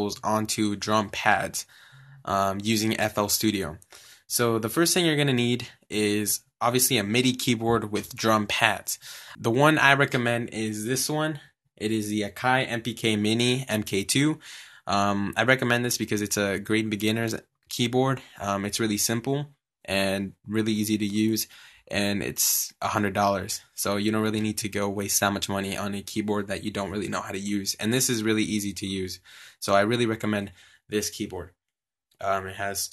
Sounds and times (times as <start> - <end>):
Speech: 0.0 - 31.5, 32.2 - 32.9.